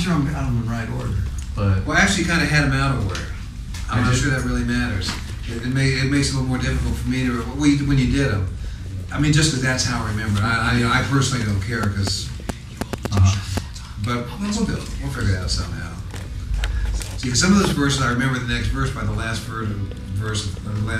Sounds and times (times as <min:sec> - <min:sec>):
Speech: 0:00.0 - 0:16.1, 0:16.9 - 0:21.0.